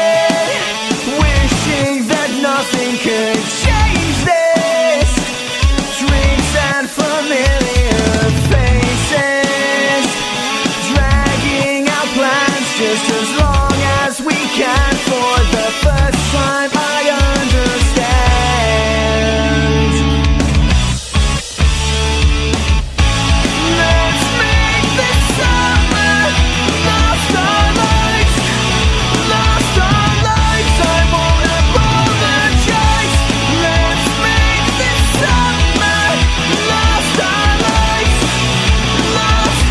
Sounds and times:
Heavy metal: 0.0 - 39.7
Progressive rock: 0.0 - 39.7.

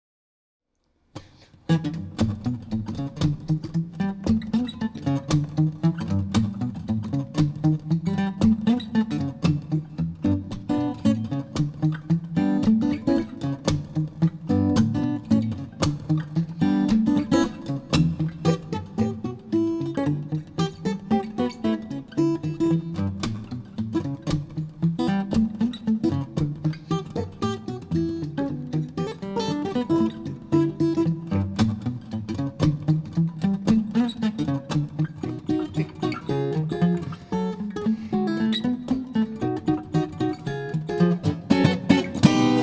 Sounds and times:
Acoustic guitar: 1.1 - 42.6
Strum: 1.2 - 42.6.

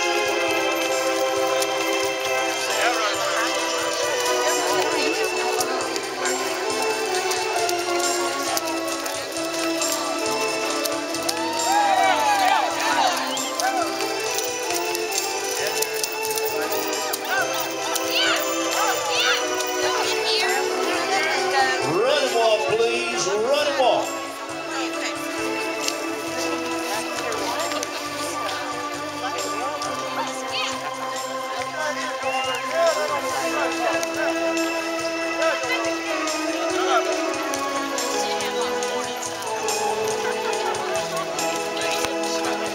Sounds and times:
Clip-clop: 0.0 - 42.7
Music: 0.0 - 42.7
Speech: 15.6 - 25.5, 26.4 - 34.7.

